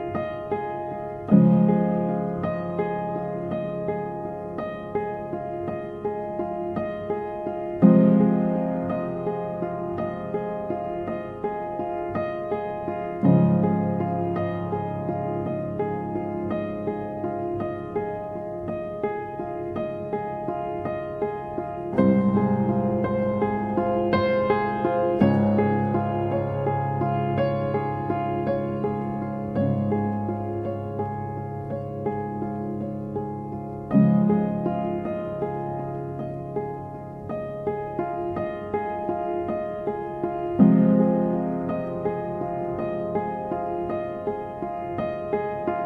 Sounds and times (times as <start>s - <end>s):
Music: 0.0s - 45.8s.